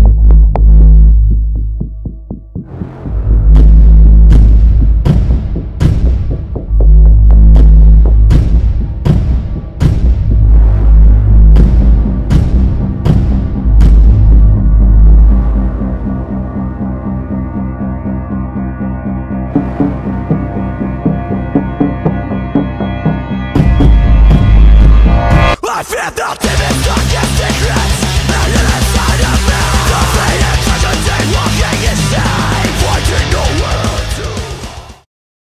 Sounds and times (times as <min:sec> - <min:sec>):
Exciting music: 0:01.6 - 0:35.0
Angry music: 0:01.8 - 0:35.1.